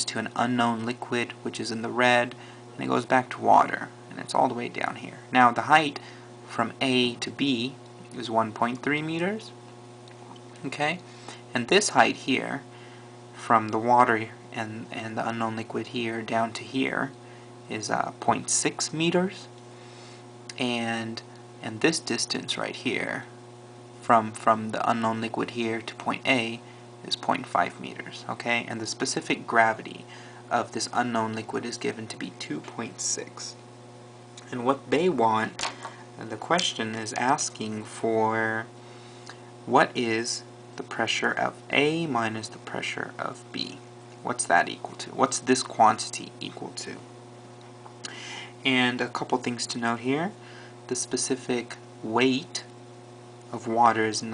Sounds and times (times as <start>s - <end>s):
Speech: 0.0s - 9.6s, 10.6s - 12.7s, 13.4s - 19.5s, 20.5s - 23.3s, 24.0s - 33.6s, 34.4s - 38.7s, 39.7s - 47.1s, 48.6s - 52.7s, 53.5s - 54.3s.